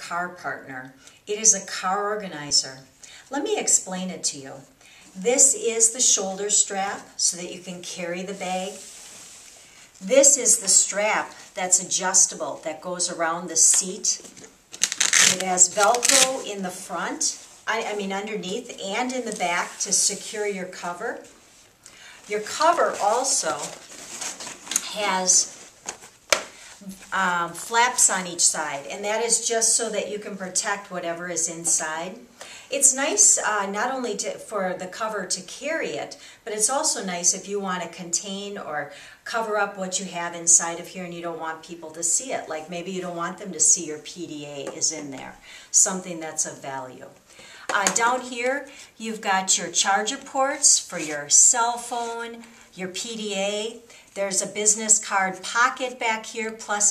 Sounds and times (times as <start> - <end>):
Speech: 0.0 - 8.8, 10.0 - 14.3, 15.2 - 21.3, 22.3 - 23.8, 24.8 - 25.6, 26.8 - 56.9.